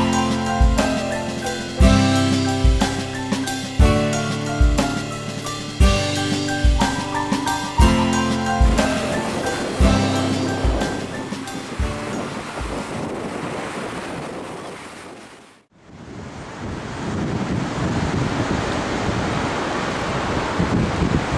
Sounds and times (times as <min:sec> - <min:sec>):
Music: 0:00.0 - 0:13.0.